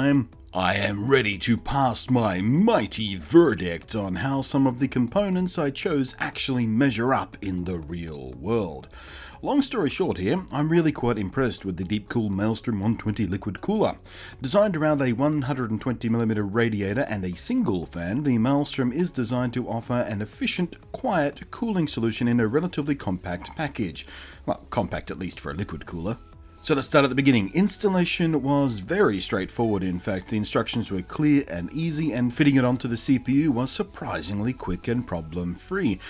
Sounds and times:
Speech: 0.0 - 36.0.

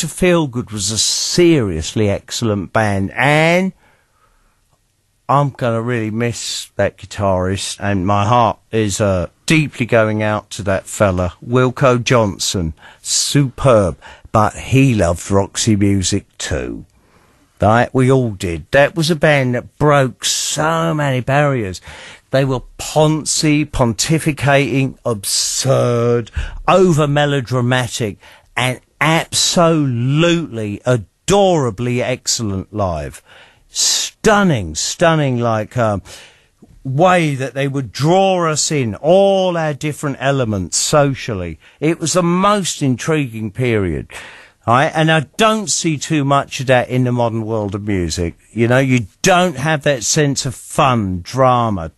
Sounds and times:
Speech: 0.0 - 3.8, 5.3 - 16.9, 17.6 - 51.9.

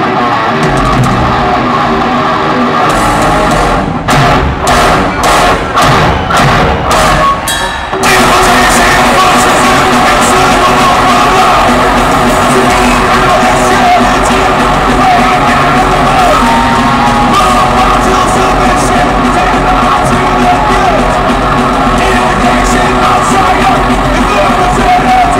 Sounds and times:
Cheering: 0.0 - 25.3
Music: 0.0 - 25.3.

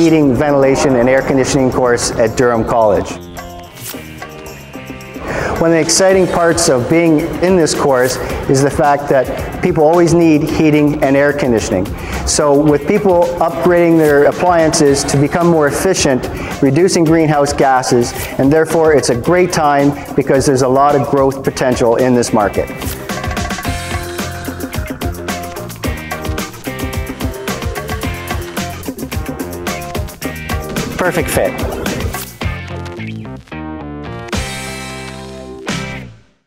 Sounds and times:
Speech: 0.0 - 3.2, 5.6 - 22.7, 31.0 - 31.8
Music: 0.0 - 36.4.

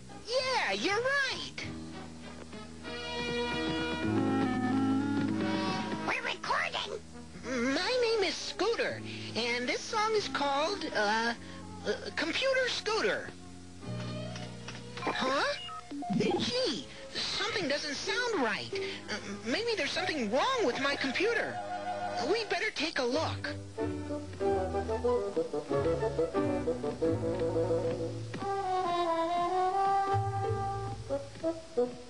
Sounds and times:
Speech: 0.3 - 1.7, 6.0 - 13.4, 15.0 - 21.6, 22.2 - 23.6
Electronic music: 15.8 - 16.7.

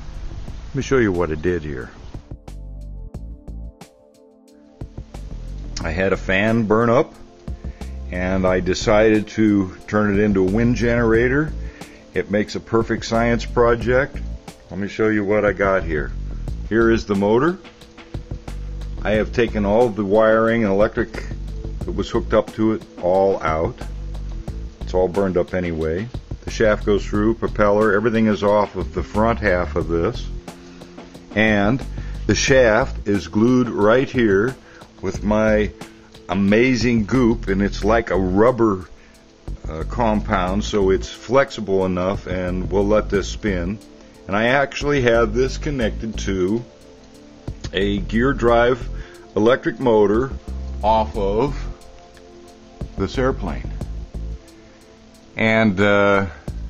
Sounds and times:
Music: 0.0 - 56.6
Speech: 0.7 - 2.0, 5.8 - 7.2, 8.1 - 11.6, 12.2 - 17.7, 19.0 - 23.9, 24.8 - 30.4, 31.3 - 38.9, 39.6 - 46.7, 47.6 - 51.8, 53.0 - 53.8, 55.4 - 56.4.

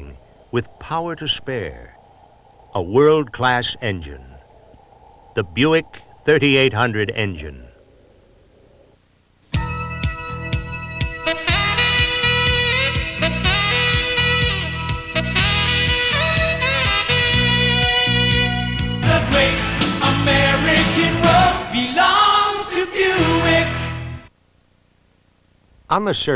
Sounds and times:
Music: 9.5 - 24.3.

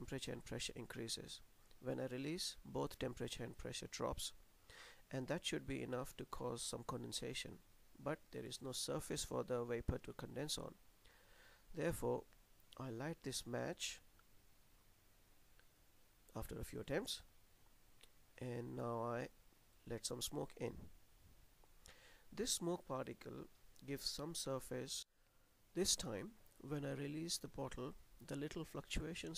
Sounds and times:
Speech: 0.0 - 4.4, 5.1 - 10.8, 11.8 - 14.0, 16.3 - 17.3, 18.4 - 20.9, 22.4 - 25.1, 25.8 - 29.3.

